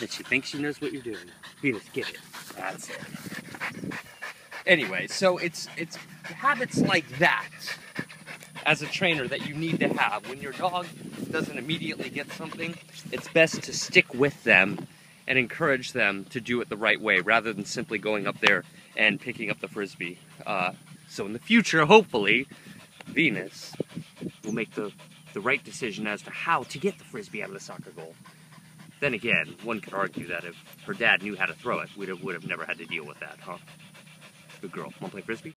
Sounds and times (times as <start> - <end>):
Dog: 0.0 - 14.4, 17.4 - 35.5.